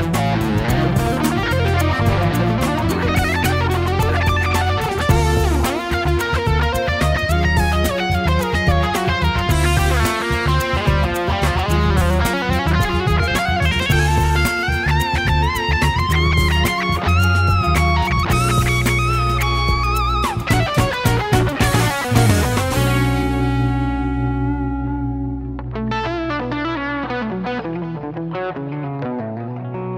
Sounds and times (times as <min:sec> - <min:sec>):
Electric guitar: 0:00.0 - 0:29.9.